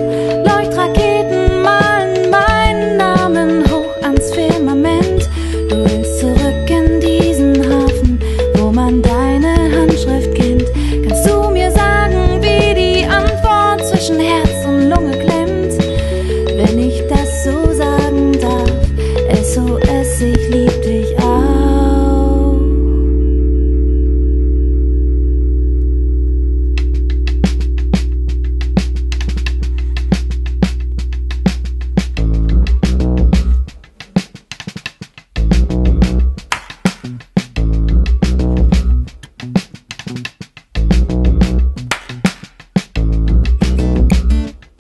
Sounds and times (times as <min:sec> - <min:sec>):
Piano: 0:00.0 - 0:33.7.